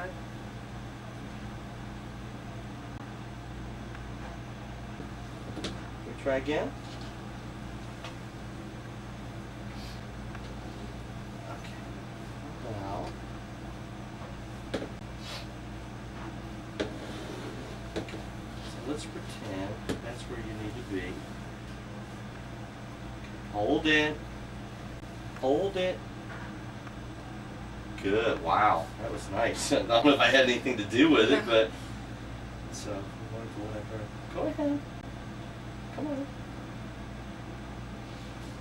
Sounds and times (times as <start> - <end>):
Speech: 18.8 - 21.2, 28.0 - 31.7.